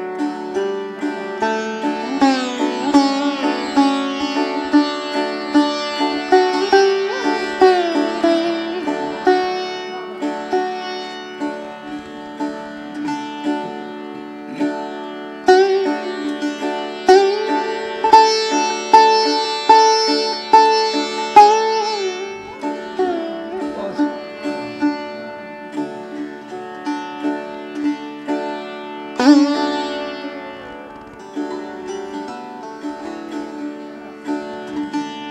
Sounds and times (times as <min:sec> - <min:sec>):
Bowed string instrument: 0:00.0 - 0:35.3
Sitar: 0:00.0 - 0:35.3.